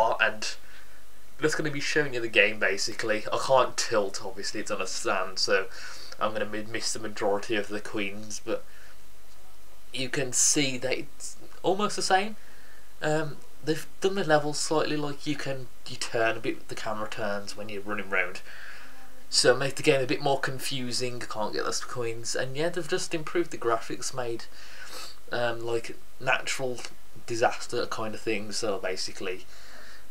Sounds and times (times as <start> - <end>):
Speech: 0.0 - 0.6, 1.4 - 8.6, 9.9 - 12.4, 13.0 - 18.5, 19.3 - 29.5.